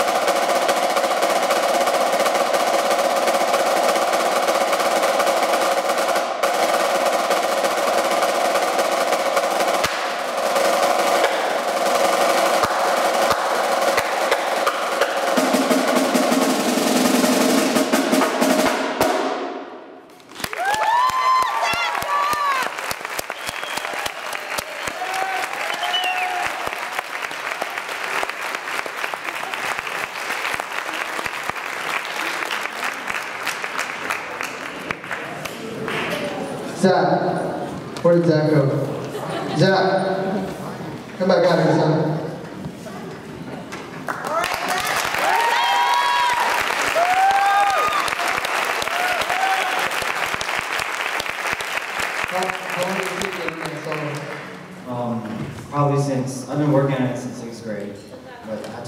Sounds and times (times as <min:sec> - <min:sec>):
Inside, large room or hall: 0:00.0 - 0:58.8.